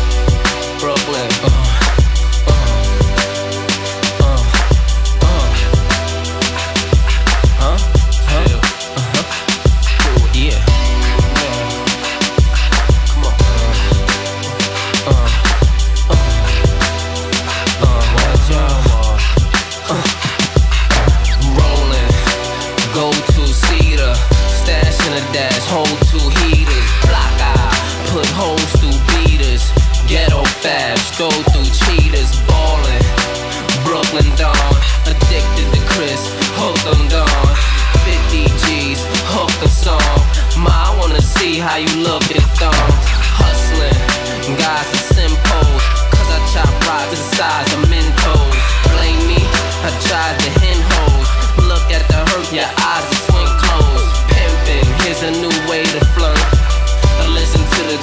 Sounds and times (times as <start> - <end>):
Music: 0.0 - 58.0.